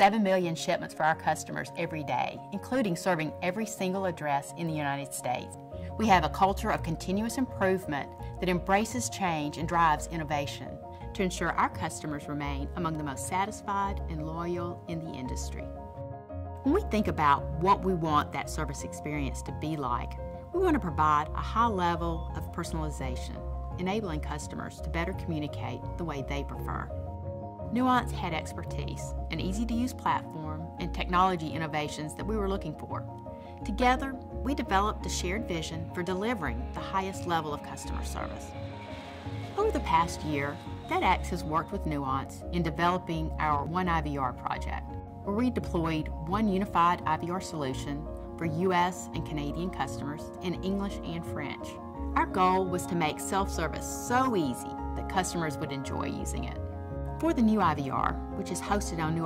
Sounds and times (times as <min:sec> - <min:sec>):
Female speech, woman speaking: 0:00.0 - 0:15.6, 0:16.7 - 0:26.9, 0:27.7 - 0:38.4, 0:39.6 - 0:56.6, 0:57.2 - 0:59.2
Music: 0:00.0 - 0:59.2.